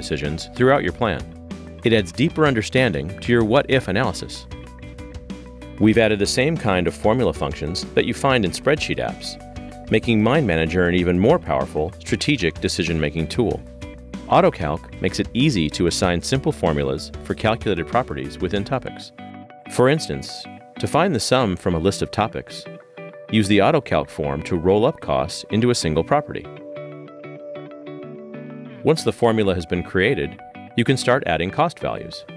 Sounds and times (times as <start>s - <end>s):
Speech: 0.0s - 4.5s, 5.8s - 13.6s, 14.3s - 19.1s, 19.7s - 22.7s, 23.3s - 26.5s, 28.8s - 32.3s
Music: 0.0s - 32.3s.